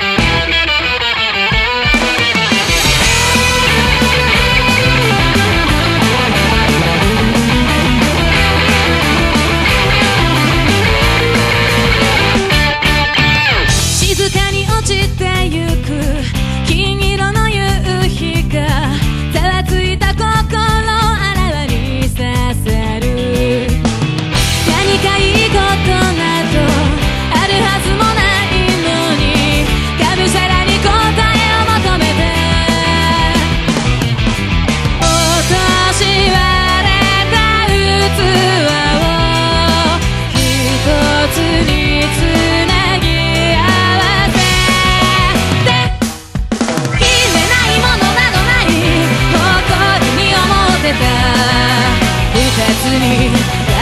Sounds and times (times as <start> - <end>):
Music: 0.0 - 53.8.